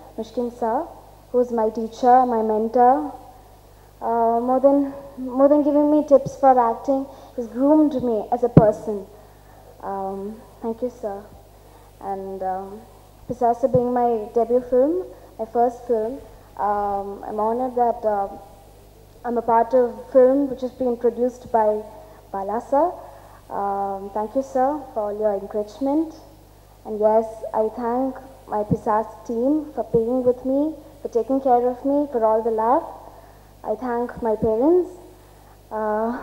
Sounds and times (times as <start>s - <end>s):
Female speech, woman speaking: 0.0s - 3.2s, 4.0s - 9.1s, 9.8s - 11.4s, 12.0s - 18.4s, 19.3s - 26.3s, 26.9s - 33.0s, 33.6s - 35.0s, 35.7s - 36.2s
Narration, monologue: 0.0s - 36.2s.